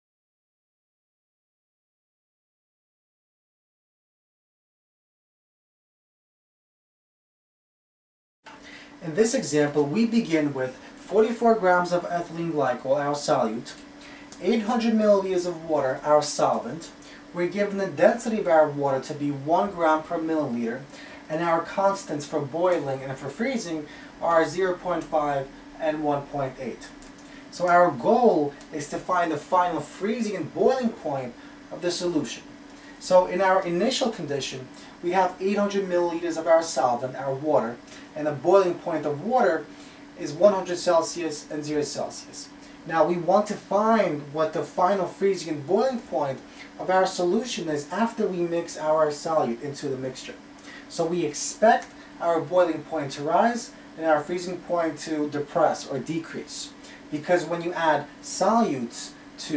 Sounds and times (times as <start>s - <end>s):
Speech: 9.0s - 59.5s.